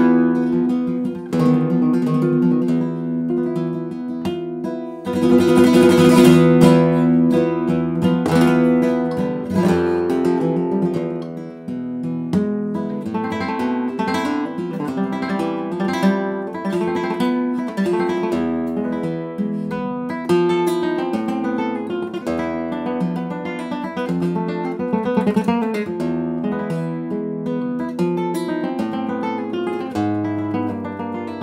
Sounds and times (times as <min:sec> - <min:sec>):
Acoustic guitar: 0:00.0 - 0:31.4
Flamenco: 0:00.0 - 0:31.4.